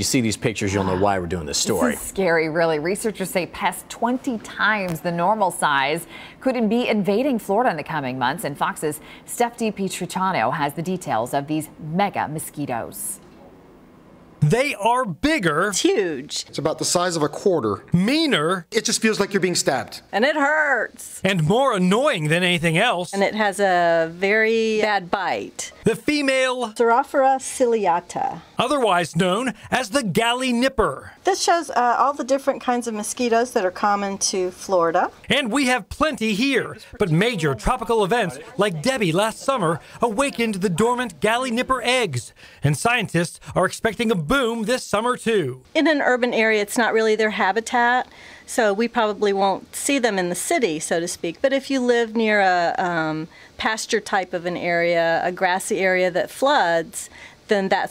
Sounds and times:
Speech: 0.0s - 2.4s, 14.4s - 20.0s, 21.2s - 23.9s, 27.7s - 31.1s, 33.3s - 47.7s.

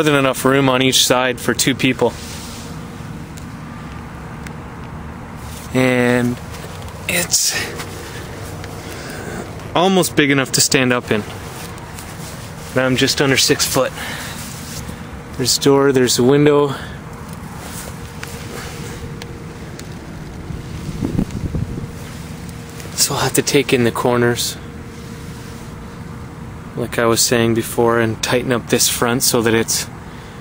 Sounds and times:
Speech: 0.0s - 2.2s, 5.7s - 6.4s, 7.1s - 7.8s, 9.7s - 11.3s, 12.7s - 14.0s, 15.4s - 17.0s, 23.0s - 24.6s, 26.8s - 29.9s.

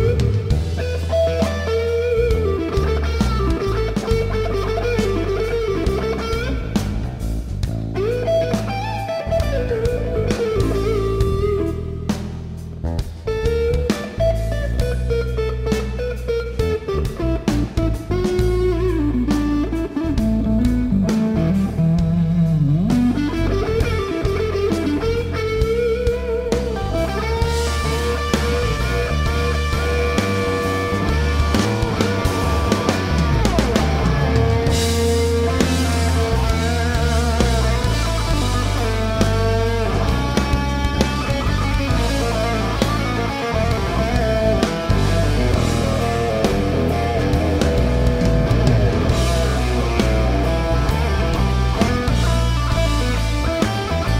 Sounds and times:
Guitar: 0.0s - 54.1s.

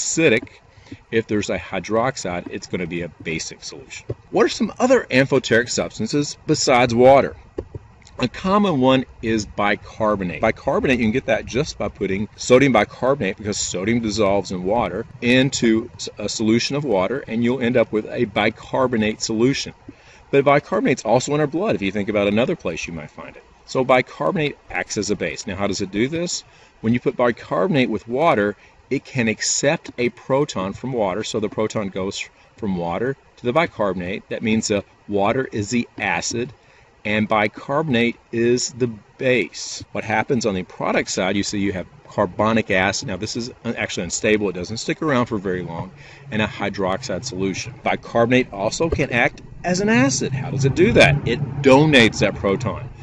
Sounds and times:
Speech: 0.0s - 0.5s, 1.1s - 7.4s, 8.2s - 36.5s, 37.1s - 52.9s.

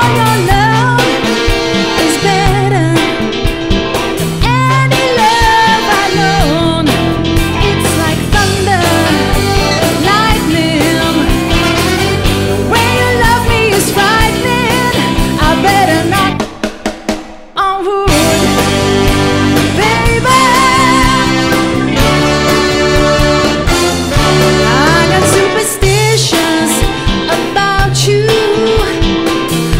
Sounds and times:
Music: 0.0s - 29.7s.

